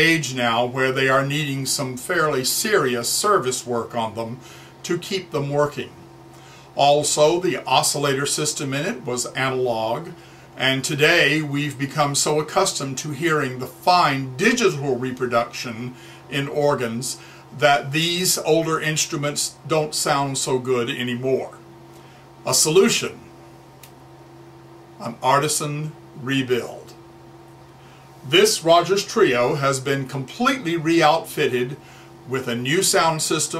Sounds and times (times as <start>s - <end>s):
Speech: 0.0s - 6.0s, 6.8s - 21.6s, 22.4s - 23.3s, 25.0s - 27.0s, 28.2s - 33.5s.